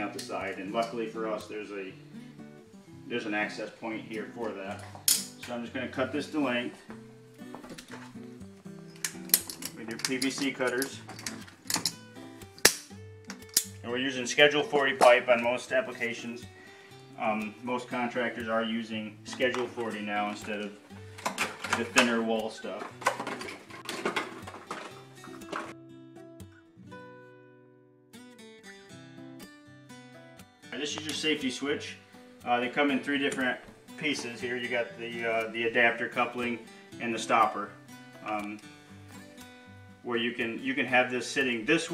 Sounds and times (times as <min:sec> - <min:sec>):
Speech: 0:00.0 - 0:02.0, 0:03.1 - 0:04.8, 0:05.4 - 0:06.8, 0:09.8 - 0:11.0, 0:13.8 - 0:16.4, 0:17.2 - 0:20.8, 0:21.7 - 0:22.9, 0:30.7 - 0:38.6, 0:40.0 - 0:41.9
Music: 0:00.0 - 0:41.9.